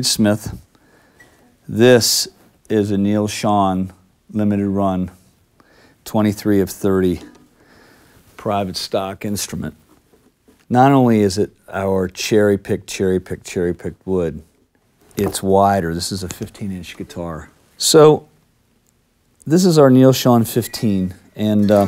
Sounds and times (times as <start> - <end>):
Speech: 0.0 - 0.7, 1.7 - 5.2, 6.0 - 7.3, 8.4 - 9.8, 10.7 - 14.5, 15.2 - 18.3, 19.4 - 21.8.